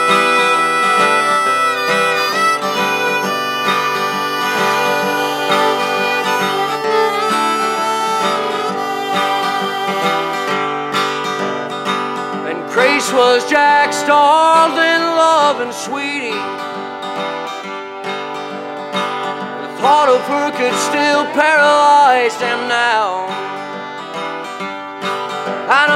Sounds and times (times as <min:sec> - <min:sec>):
Music: 0:00.0 - 0:25.9.